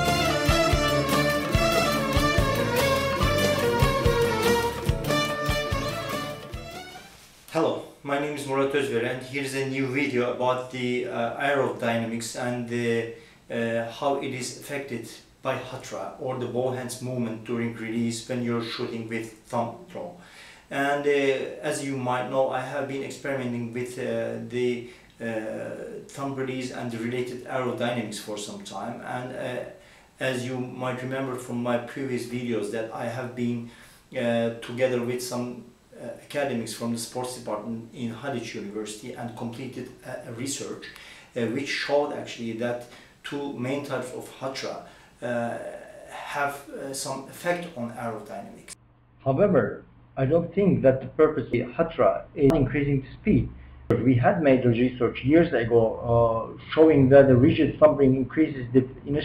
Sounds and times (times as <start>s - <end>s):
Speech: 7.5s - 59.2s.